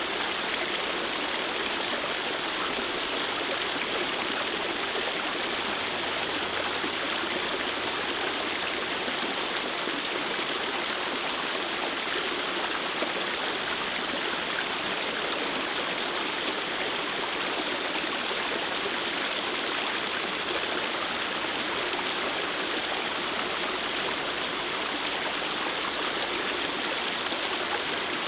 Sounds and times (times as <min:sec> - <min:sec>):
Stream: 0:00.0 - 0:28.2.